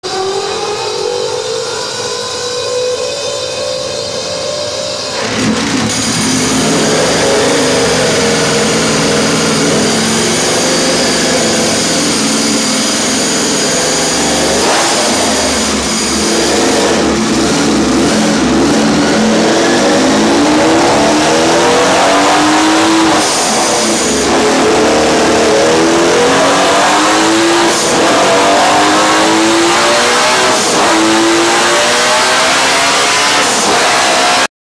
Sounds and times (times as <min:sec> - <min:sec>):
Motorcycle: 0:00.0 - 0:34.5.